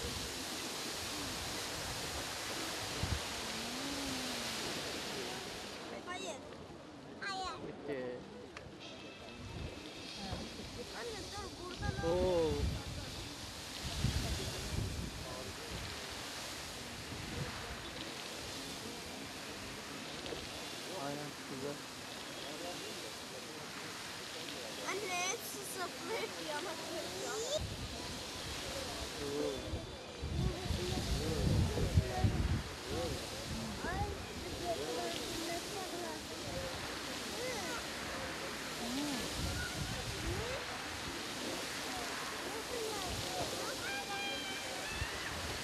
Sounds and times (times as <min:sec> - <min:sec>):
Water: 0:00.0 - 0:45.6.